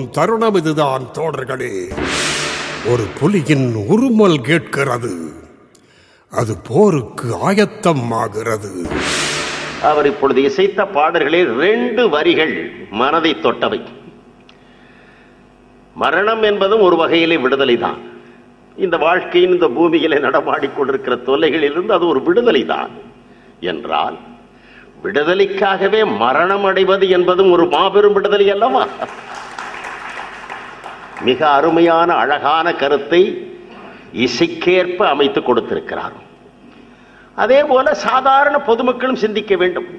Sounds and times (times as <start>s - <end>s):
Male speech, man speaking: 0.0s - 2.0s, 2.8s - 5.5s, 6.3s - 8.9s, 9.8s - 14.0s, 16.0s - 18.1s, 18.8s - 23.0s, 23.6s - 24.3s, 25.0s - 29.1s, 31.2s - 33.5s, 34.2s - 36.3s, 37.4s - 39.9s.